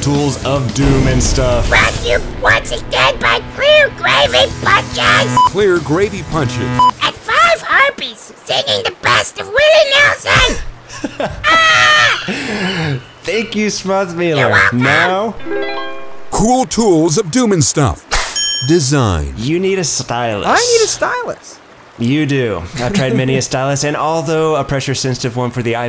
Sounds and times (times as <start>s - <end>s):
Music: 0.0s - 7.1s, 15.4s - 16.4s
Speech: 0.0s - 10.7s, 13.3s - 15.4s, 18.6s - 25.8s.